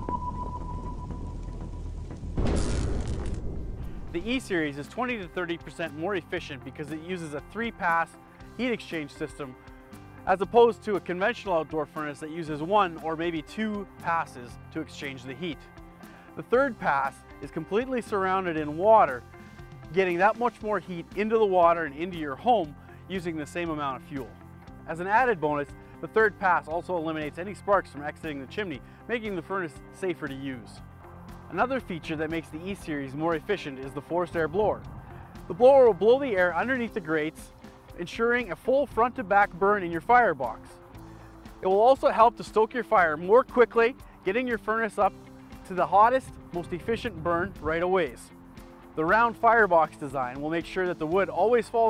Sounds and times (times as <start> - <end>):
Music: 0.0 - 2.5, 3.5 - 51.8
Speech: 4.2 - 9.5, 10.3 - 15.6, 16.4 - 19.2, 19.9 - 24.3, 24.9 - 30.8, 31.5 - 34.8, 35.5 - 40.8, 41.6 - 48.3, 49.0 - 51.8.